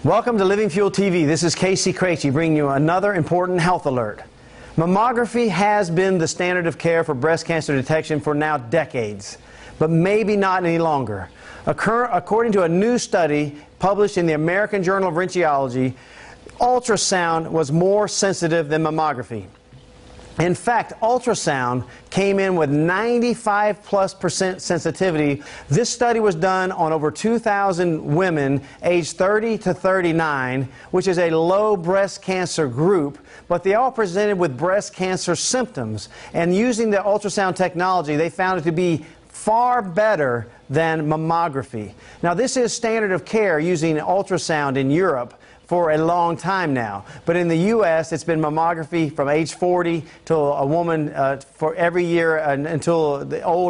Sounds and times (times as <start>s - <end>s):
Speech: 0.0s - 19.6s, 20.4s - 53.7s.